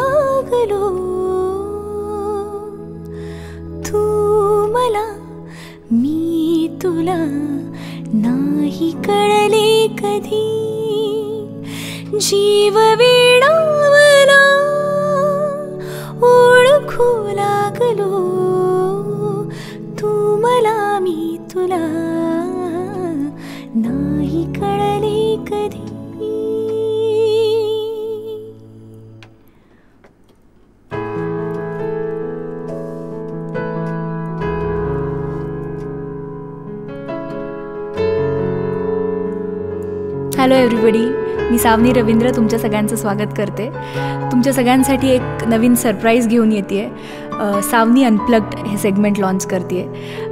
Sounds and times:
Music: 0.0 - 50.3.

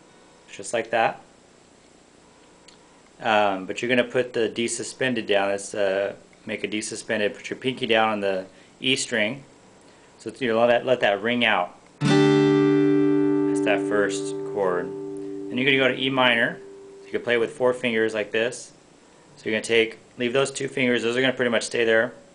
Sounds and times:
Speech: 0.5 - 1.3, 3.2 - 9.5, 10.2 - 11.8, 13.6 - 14.9, 15.5 - 18.8, 19.4 - 22.2
Guitar: 10.7 - 18.7.

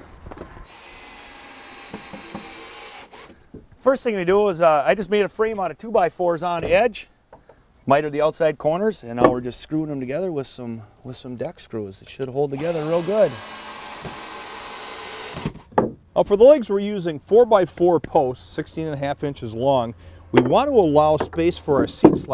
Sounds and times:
Speech: 3.8 - 7.1, 7.9 - 13.4, 16.2 - 22.3.

